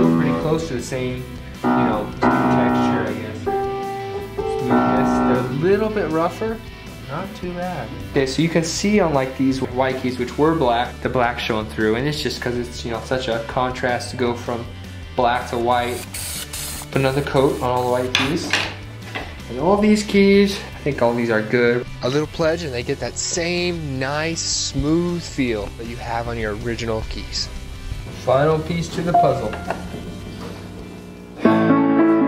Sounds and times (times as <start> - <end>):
Speech: 0.0 - 3.4, 4.9 - 16.0, 16.9 - 18.7, 19.5 - 27.5, 28.2 - 29.6.